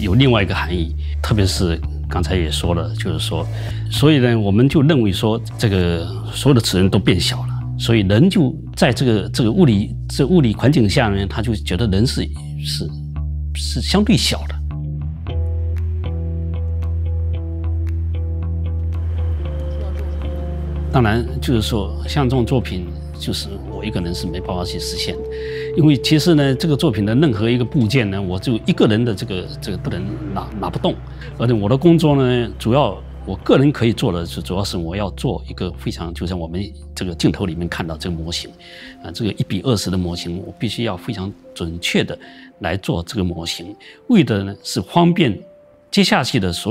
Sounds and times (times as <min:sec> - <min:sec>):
Speech: 0:00.0 - 0:14.6, 0:19.6 - 0:46.7
Music: 0:00.0 - 0:46.7.